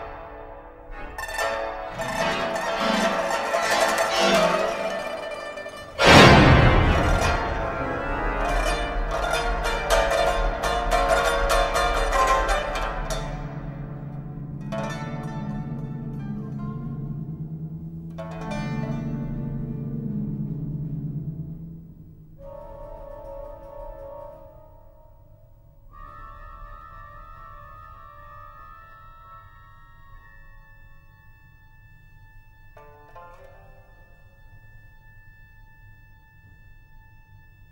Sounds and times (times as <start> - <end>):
Harpsichord: 0.0 - 25.9
Classical music: 0.0 - 37.7.